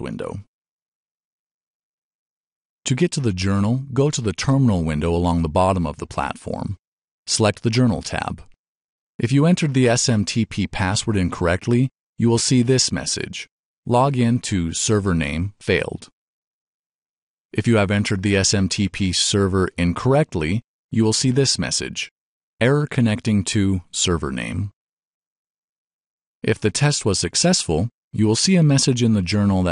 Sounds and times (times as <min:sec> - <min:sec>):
Speech: 0:00.0 - 0:00.5, 0:02.9 - 0:08.5, 0:09.2 - 0:16.2, 0:17.6 - 0:24.8, 0:26.4 - 0:29.7.